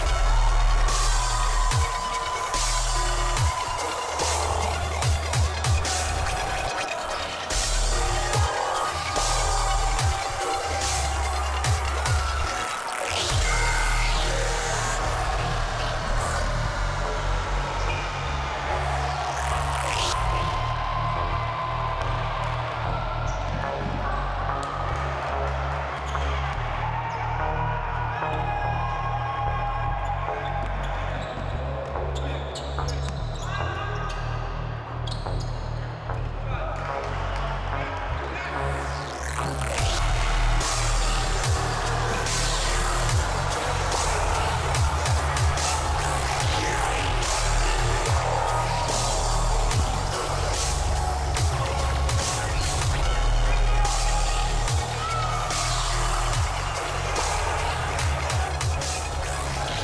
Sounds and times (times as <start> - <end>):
Music: 0.0 - 59.8
Speech: 36.3 - 39.0.